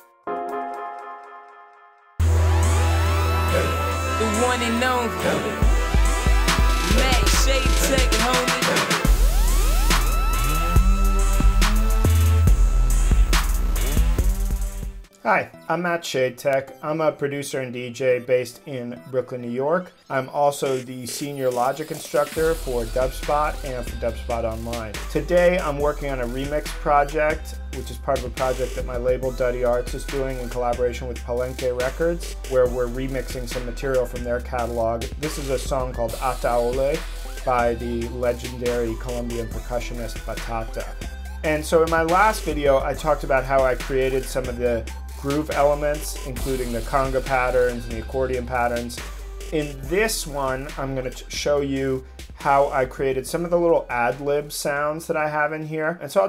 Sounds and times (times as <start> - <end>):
Speech: 3.6 - 5.6, 6.9 - 8.9, 15.2 - 49.0, 49.6 - 56.2.